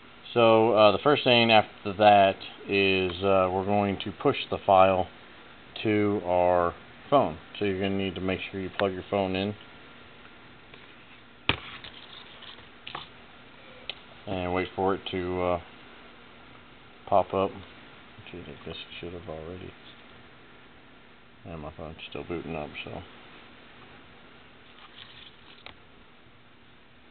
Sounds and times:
Inside, small room: 0:00.0 - 0:27.1
Speech: 0:00.3 - 0:05.1, 0:05.8 - 0:09.6, 0:14.2 - 0:15.7, 0:17.1 - 0:20.0, 0:21.4 - 0:23.1.

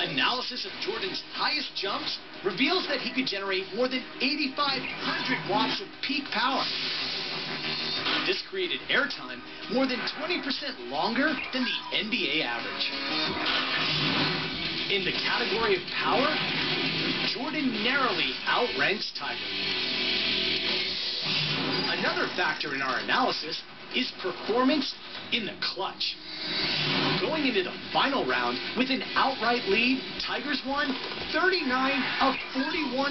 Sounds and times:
Speech: 0:00.0 - 0:06.7, 0:08.3 - 0:12.9, 0:14.9 - 0:16.4, 0:17.3 - 0:19.4, 0:21.9 - 0:26.2, 0:27.2 - 0:33.1
Music: 0:00.0 - 0:23.5, 0:25.9 - 0:33.1.

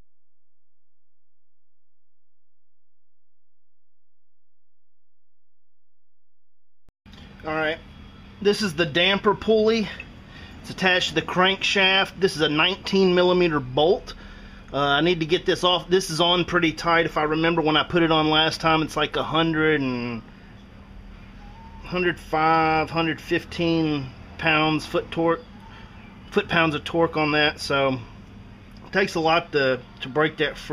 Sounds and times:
Speech: 0:07.4 - 0:07.8, 0:08.4 - 0:20.3, 0:21.8 - 0:25.5, 0:26.3 - 0:28.1, 0:28.9 - 0:30.7.

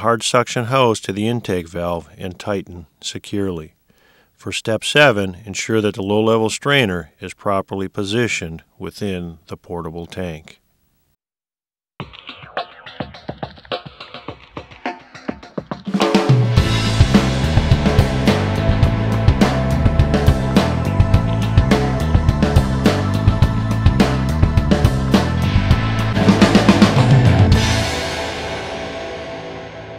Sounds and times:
Speech: 0:00.0 - 0:03.8, 0:04.4 - 0:10.6
Music: 0:12.0 - 0:29.9.

